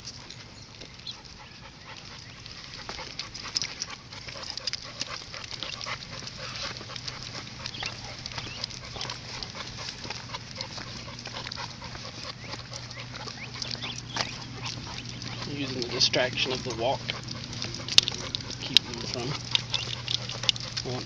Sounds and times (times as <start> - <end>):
Canidae, dogs, wolves: 0.0 - 21.0
Dog: 0.0 - 21.0.